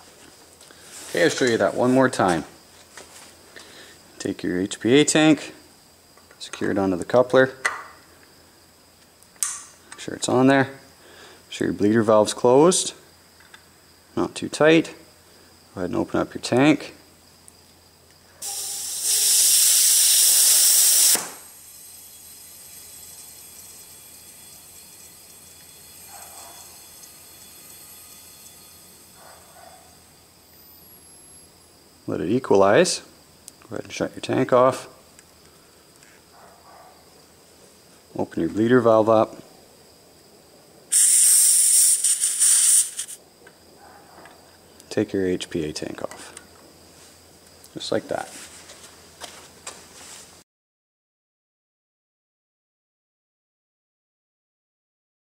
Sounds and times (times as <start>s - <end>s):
Hiss: 18.4s - 24.9s, 40.9s - 43.2s.